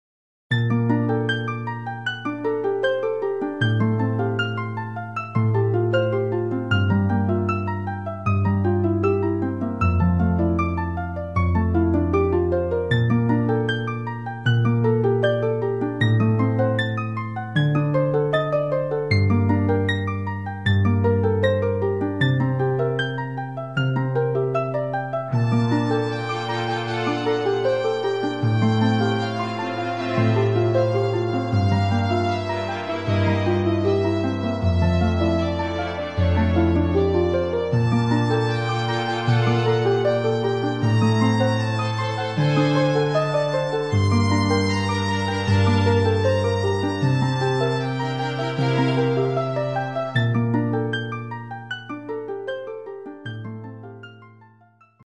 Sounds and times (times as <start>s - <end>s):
Music: 0.5s - 55.0s.